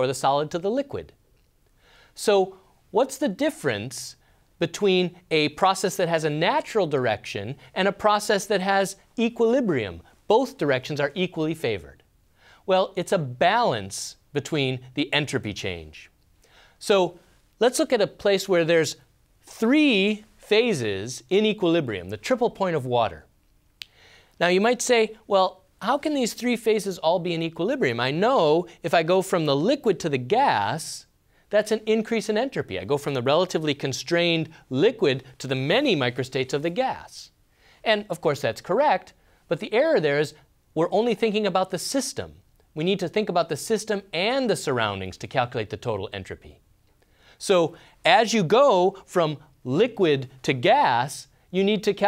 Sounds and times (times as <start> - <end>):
Speech: 0.0 - 1.2, 2.2 - 12.1, 12.7 - 16.2, 16.8 - 23.3, 24.4 - 46.6, 47.4 - 52.0.